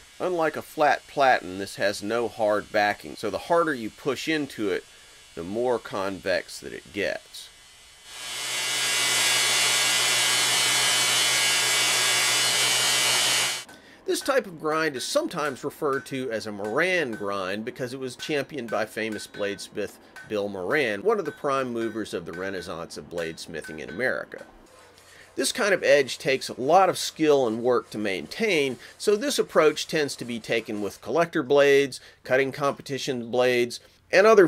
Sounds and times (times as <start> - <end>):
Power tool: 0.0 - 13.7.